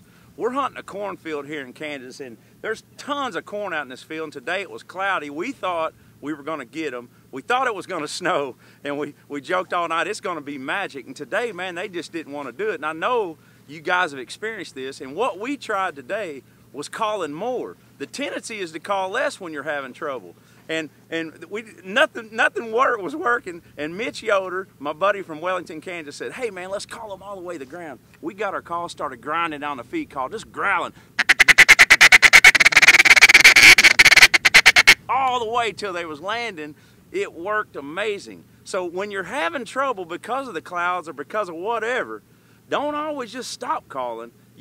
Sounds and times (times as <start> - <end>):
Speech: 0.4 - 31.0, 35.1 - 44.6
Quack: 31.2 - 35.0.